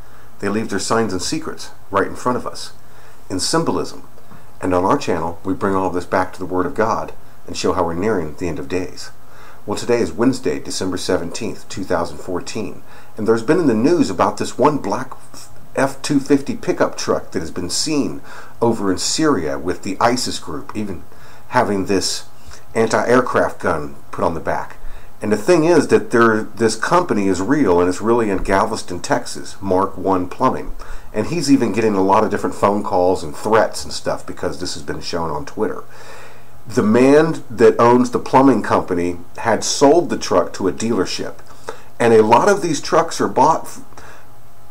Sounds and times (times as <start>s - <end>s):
Speech: 0.4s - 35.9s, 36.7s - 43.9s.